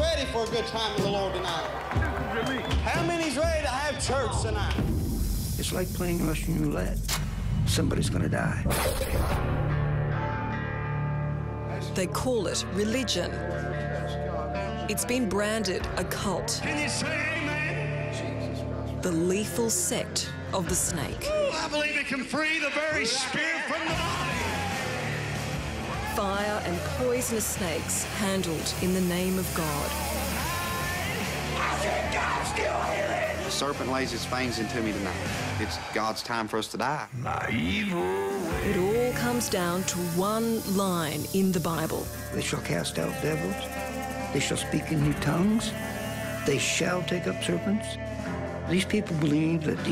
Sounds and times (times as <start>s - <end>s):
Music: 0.0s - 49.9s
Hiss: 4.9s - 7.2s, 27.8s - 31.5s, 37.9s - 44.4s, 45.4s - 46.6s.